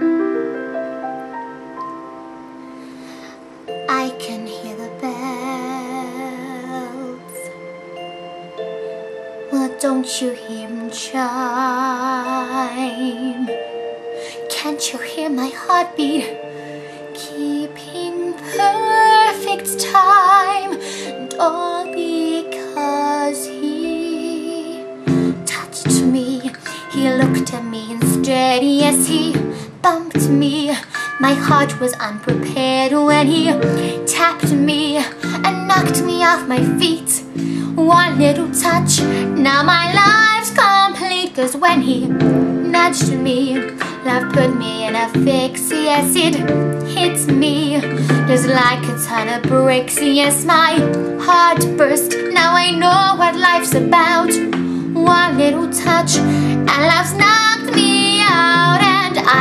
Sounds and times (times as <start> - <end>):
Music: 0.0 - 59.4
Female singing: 3.9 - 7.5, 9.6 - 13.6, 14.5 - 16.4, 17.1 - 59.4.